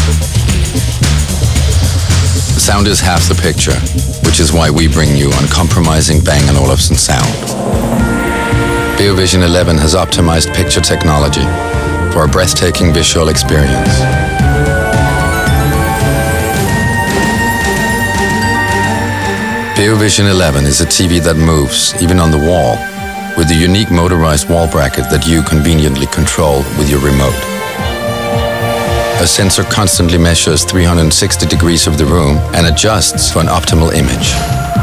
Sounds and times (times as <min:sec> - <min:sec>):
Music: 0:00.0 - 0:34.8
Speech: 0:02.5 - 0:07.4, 0:09.0 - 0:14.1, 0:19.8 - 0:22.8, 0:23.4 - 0:27.5, 0:29.2 - 0:34.5.